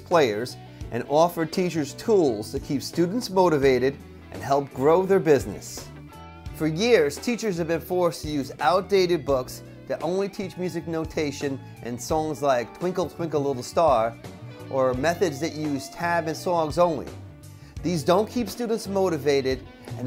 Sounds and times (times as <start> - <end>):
Speech: 0.0 - 5.9, 6.6 - 17.2, 17.8 - 20.0.